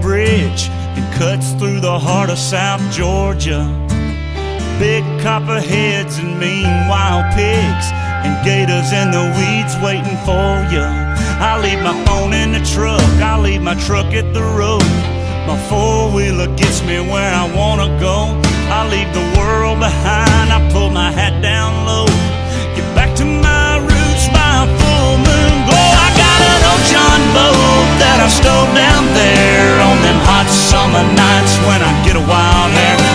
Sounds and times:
Music: 0.0s - 33.1s.

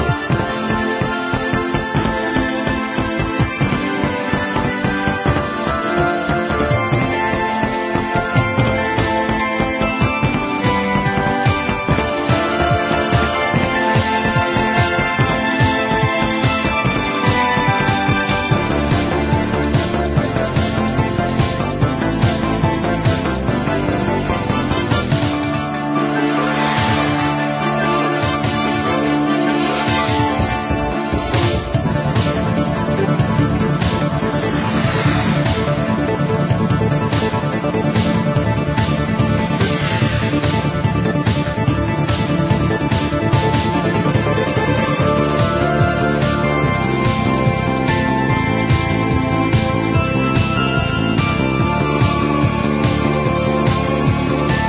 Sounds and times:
Video game music: 0.0s - 54.6s.

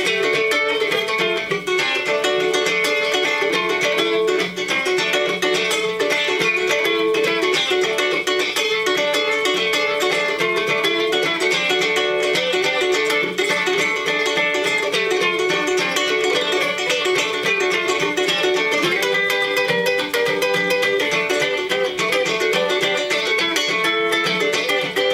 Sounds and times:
Ukulele: 0.0s - 25.1s.

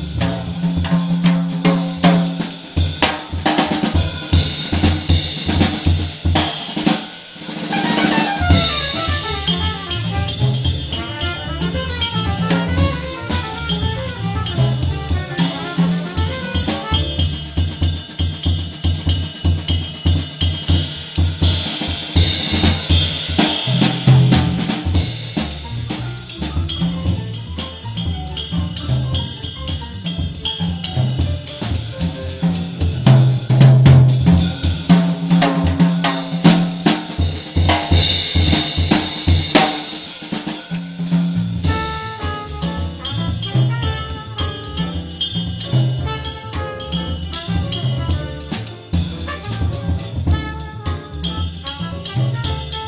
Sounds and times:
Cymbal: 0.0s - 52.8s
Drum kit: 0.0s - 52.8s
Jazz: 0.0s - 52.8s.

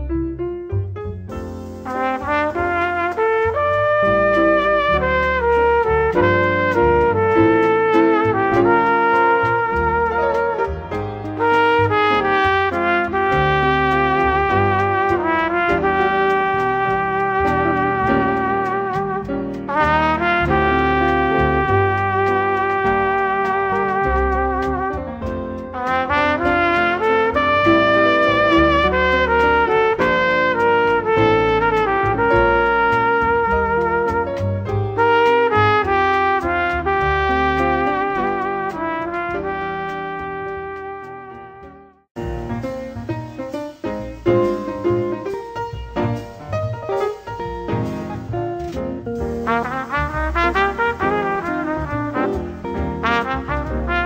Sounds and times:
Trumpet: 1.3s - 54.0s.

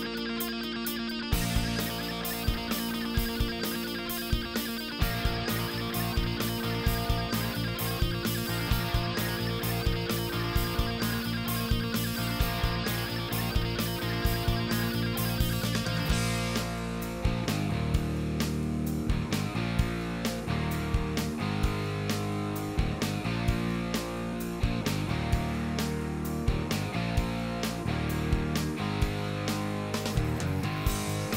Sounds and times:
Music: 0.0s - 31.3s.

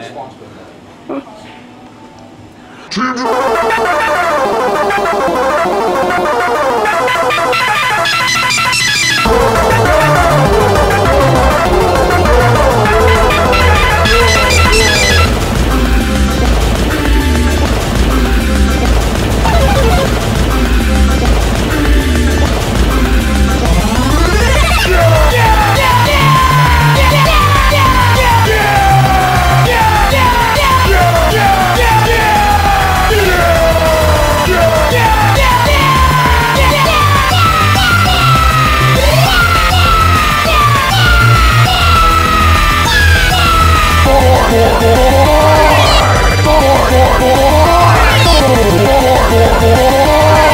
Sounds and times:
Music: 3.4s - 50.5s.

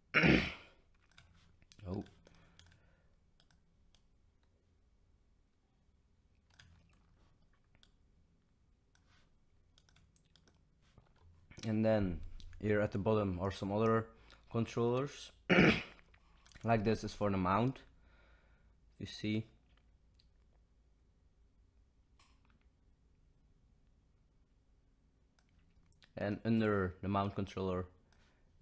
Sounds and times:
Speech: 1.8s - 2.2s, 11.6s - 15.4s, 16.6s - 17.9s, 19.0s - 19.6s, 26.2s - 28.0s
Clicking: 3.4s - 4.5s, 9.8s - 10.6s, 25.4s - 26.1s.

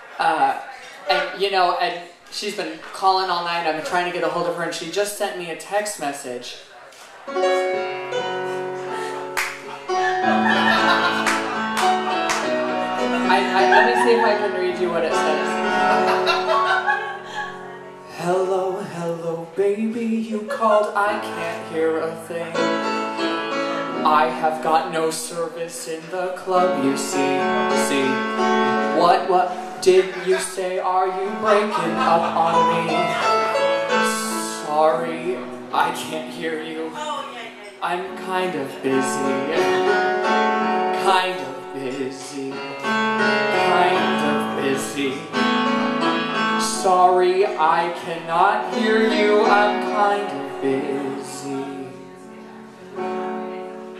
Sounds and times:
Speech: 0.0s - 7.0s, 13.3s - 15.5s, 29.0s - 33.3s, 34.1s - 39.8s
Music: 7.0s - 53.9s.

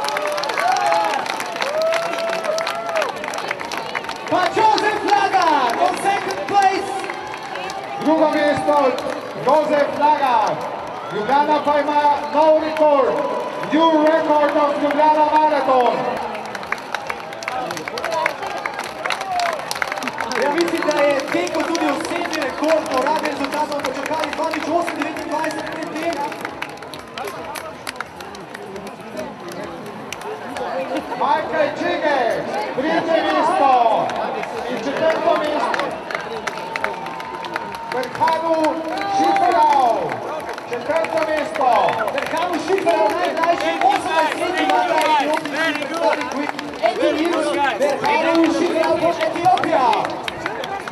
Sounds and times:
Outside, urban or manmade: 0.0s - 50.9s
Speech: 20.3s - 26.5s, 37.9s - 50.9s.

